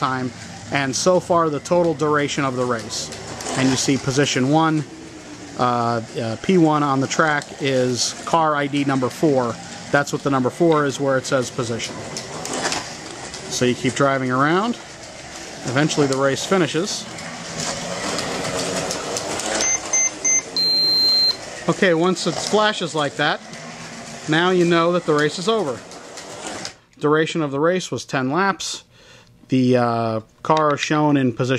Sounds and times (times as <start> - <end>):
Speech: 0.0 - 4.9, 5.6 - 12.0, 13.5 - 14.8, 15.6 - 17.1, 21.7 - 23.4, 24.3 - 25.8, 27.0 - 28.9, 29.5 - 31.5.